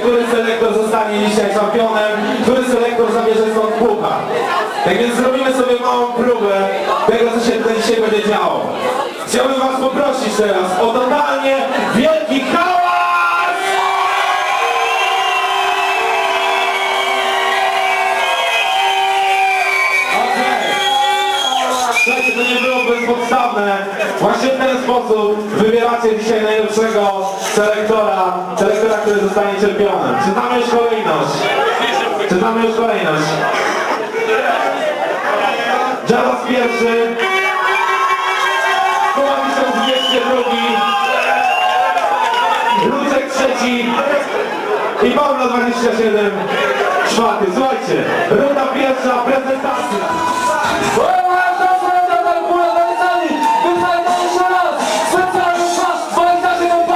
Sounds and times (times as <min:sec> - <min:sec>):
Speech: 0:00.0 - 0:13.6, 0:21.7 - 0:37.3, 0:39.1 - 0:41.0, 0:42.8 - 0:44.4, 0:45.0 - 0:56.9.